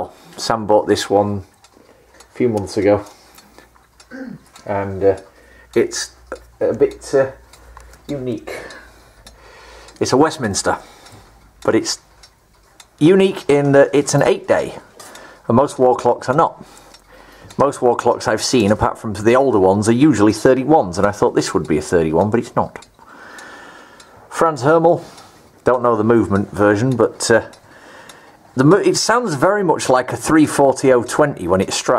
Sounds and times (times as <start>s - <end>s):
Speech: 0.0s - 1.5s, 2.4s - 3.1s, 4.1s - 7.4s, 8.1s - 8.8s, 10.0s - 10.9s, 11.6s - 12.0s, 13.0s - 14.9s, 15.5s - 16.7s, 17.6s - 22.9s, 24.3s - 27.6s, 28.6s - 31.9s
Tick-tock: 0.0s - 31.9s.